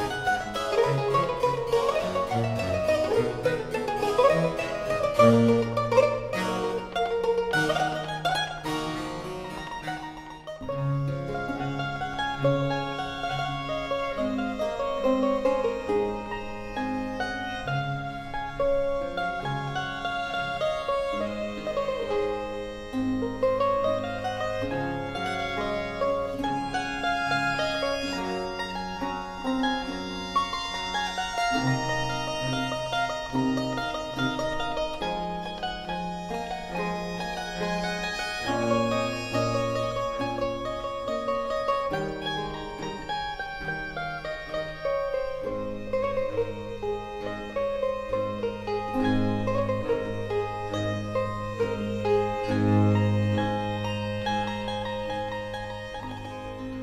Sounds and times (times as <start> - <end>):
Classical music: 0.0 - 56.8
Mandolin: 0.0 - 56.8
Orchestra: 0.0 - 56.8
Violin, fiddle: 0.0 - 56.8.